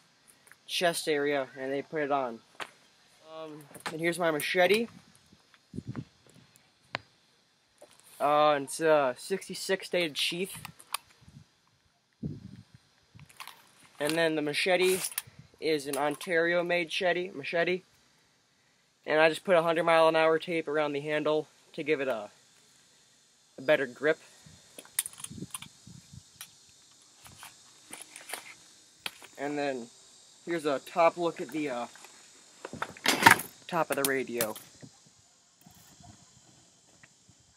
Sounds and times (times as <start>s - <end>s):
Outside, rural or natural: 0.0s - 37.5s
Speech: 0.7s - 2.4s, 3.2s - 4.9s, 8.2s - 10.6s, 14.0s - 17.8s, 19.1s - 22.3s, 23.6s - 24.2s, 29.4s - 29.9s, 30.5s - 31.9s, 33.7s - 34.6s.